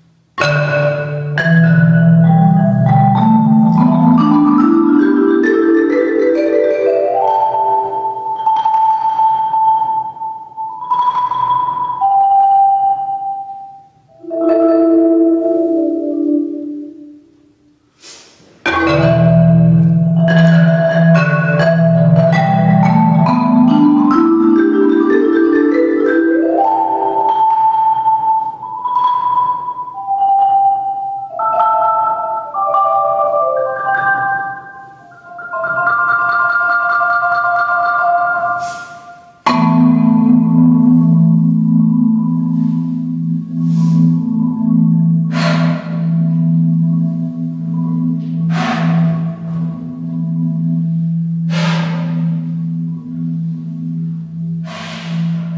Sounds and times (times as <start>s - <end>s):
Music: 0.0s - 18.0s, 18.6s - 55.5s.